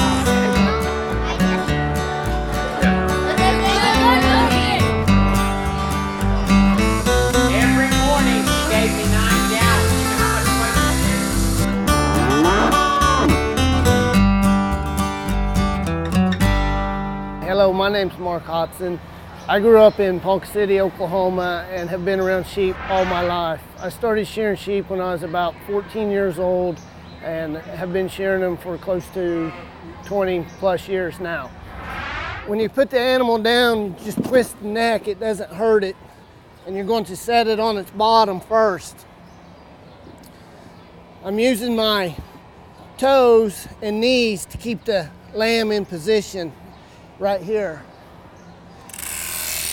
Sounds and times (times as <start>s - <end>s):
Speech: 17.4s - 31.5s, 47.2s - 47.9s.